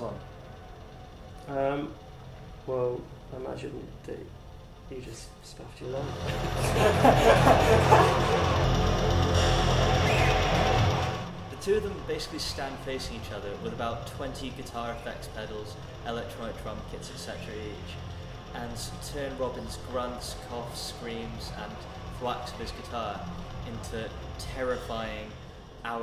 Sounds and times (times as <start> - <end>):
Music: 0.0 - 26.0
Speech: 11.6 - 18.0, 18.6 - 26.0.